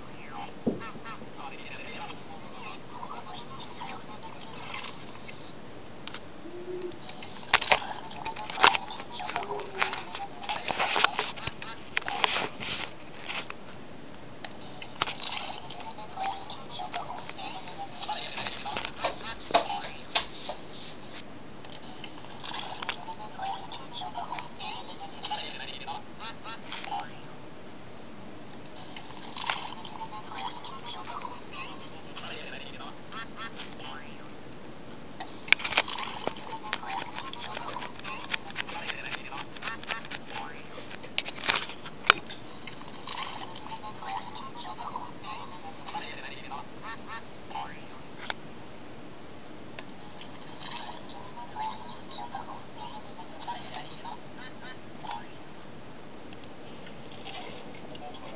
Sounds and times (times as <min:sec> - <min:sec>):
Speech: 0:00.1 - 0:04.9, 0:15.7 - 0:20.2, 0:29.8 - 0:34.3, 0:36.3 - 0:41.0.